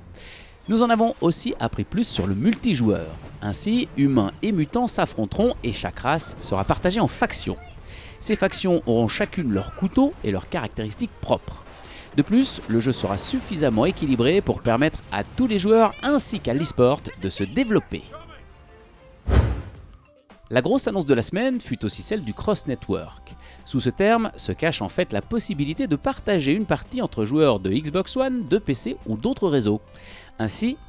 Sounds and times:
Speech: 0.7 - 18.5, 20.5 - 29.8, 30.4 - 30.8.

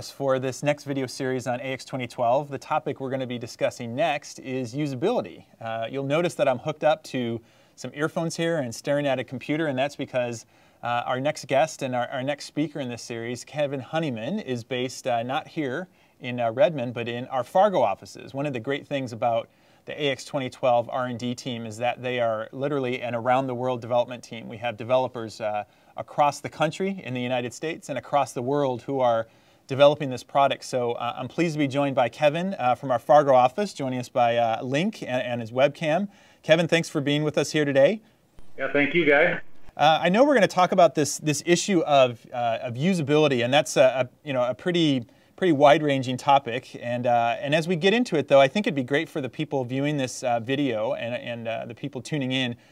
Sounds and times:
Speech: 0.0 - 52.6.

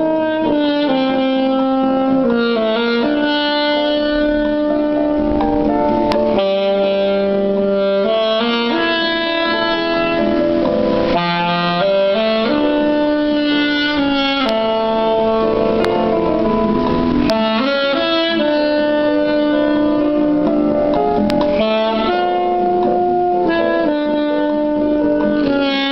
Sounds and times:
Saxophone: 0.0 - 25.9.

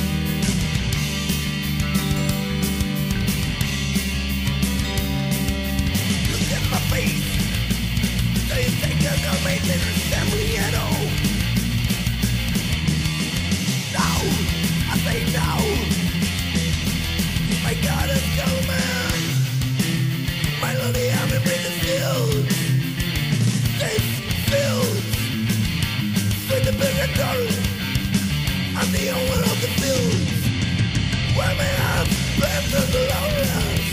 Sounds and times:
Music: 0.0 - 33.9.

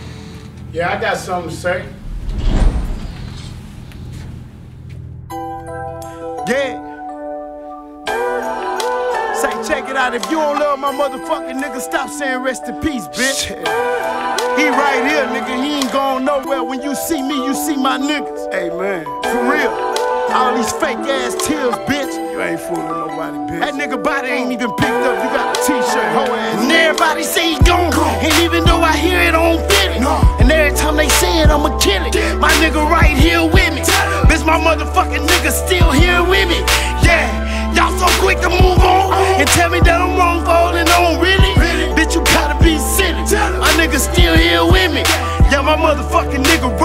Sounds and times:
Music: 0.0 - 46.8
Rapping: 6.4 - 6.8, 8.1 - 46.8.

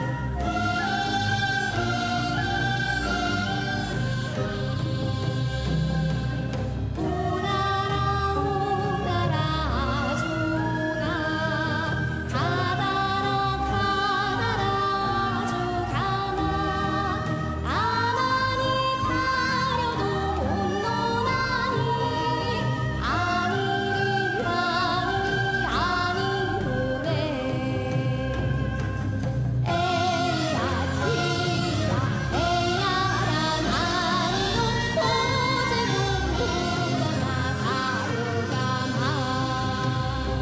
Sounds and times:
Music: 0.0 - 40.4.

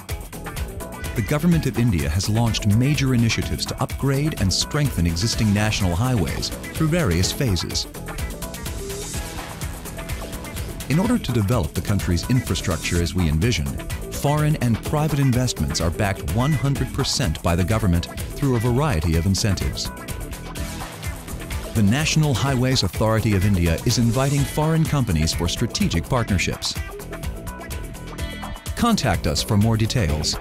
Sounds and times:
Music: 0.0 - 30.4
Speech: 1.2 - 7.9, 10.9 - 19.9, 21.8 - 26.8, 28.8 - 30.4.

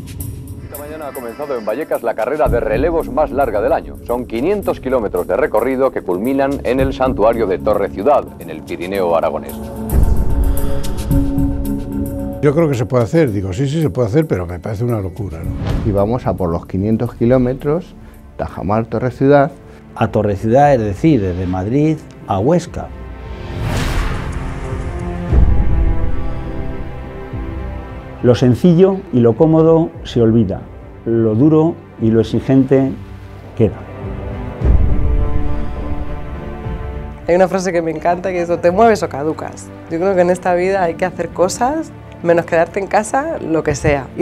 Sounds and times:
Music: 0.0 - 44.2.

